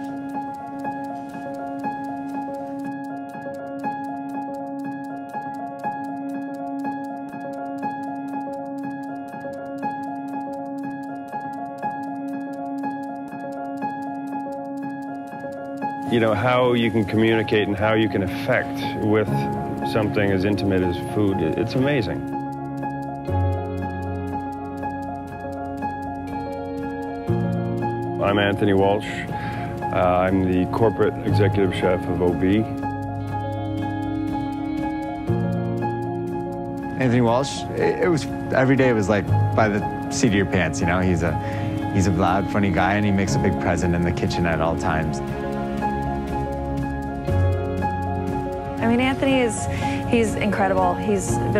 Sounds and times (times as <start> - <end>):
Music: 0.0 - 51.5
Speech: 16.1 - 22.2, 28.2 - 29.2, 29.9 - 32.7, 37.0 - 45.2, 48.8 - 51.5.